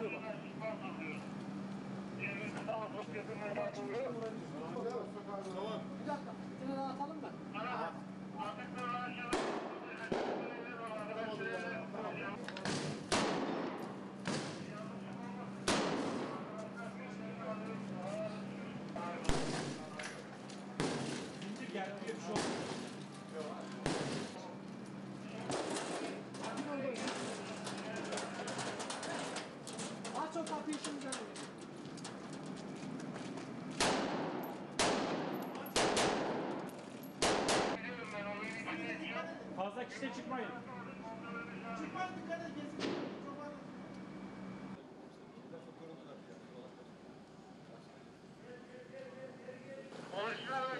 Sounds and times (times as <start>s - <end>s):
Speech: 0.0s - 1.3s, 2.2s - 12.7s, 14.6s - 15.7s, 16.3s - 20.3s, 21.4s - 22.5s, 23.3s - 23.8s, 25.2s - 29.4s, 30.1s - 31.4s, 37.8s - 43.8s, 47.6s - 50.7s.